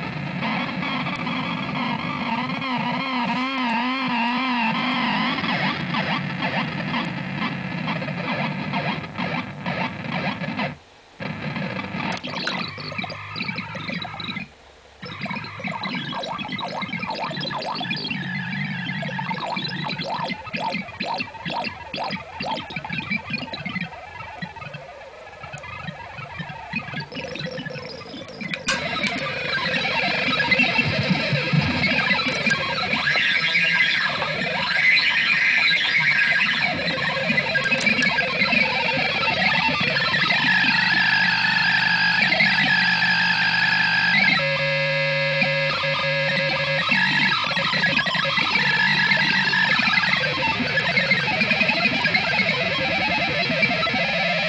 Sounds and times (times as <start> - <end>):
Distortion: 0.0 - 54.4.